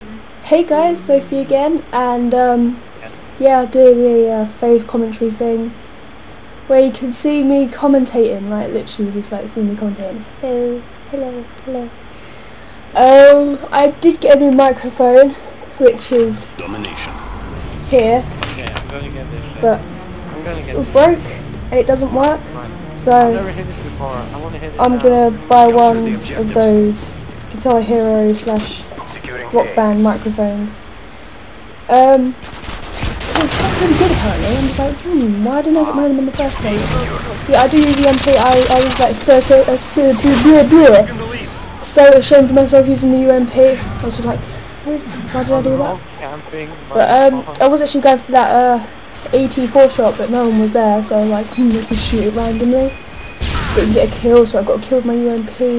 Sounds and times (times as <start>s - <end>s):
Speech: 0.0s - 5.8s, 6.7s - 11.9s, 13.0s - 17.2s, 17.9s - 19.8s, 20.4s - 30.8s, 31.9s - 32.4s, 33.4s - 52.9s, 53.8s - 55.7s.